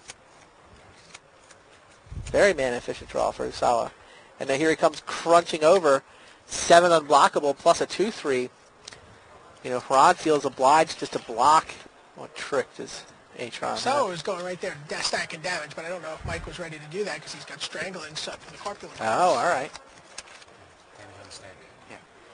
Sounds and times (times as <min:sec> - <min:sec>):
Speech: 0:02.4 - 0:06.0, 0:09.6 - 0:19.8.